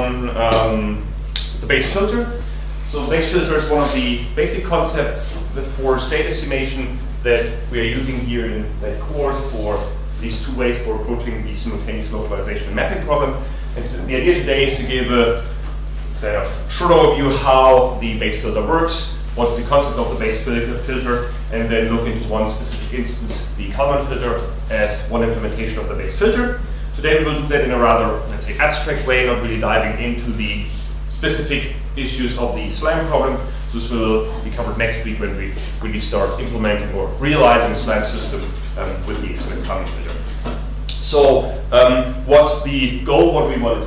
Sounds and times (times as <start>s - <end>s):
Speech: 0.0s - 15.6s, 16.2s - 40.3s, 40.9s - 43.8s.